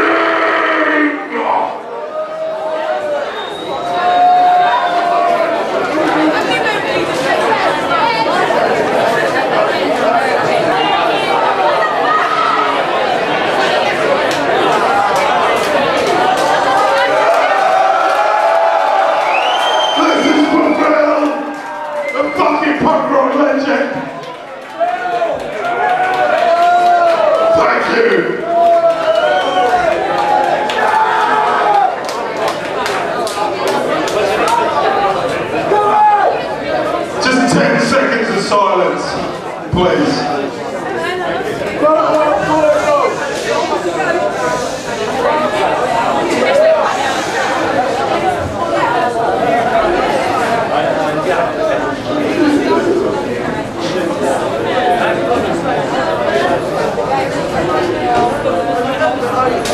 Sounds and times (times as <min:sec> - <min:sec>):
Speech: 0:20.0 - 0:24.2, 0:33.0 - 0:59.7.